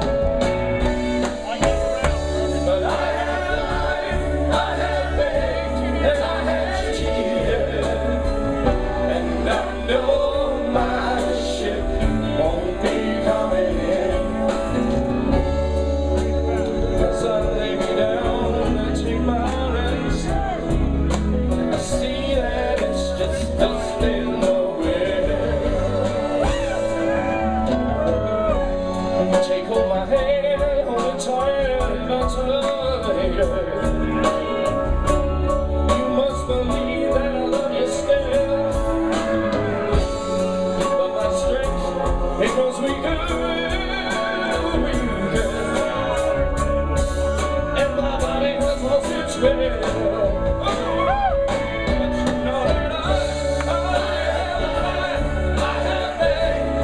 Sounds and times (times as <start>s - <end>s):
Music: 0.0s - 56.8s.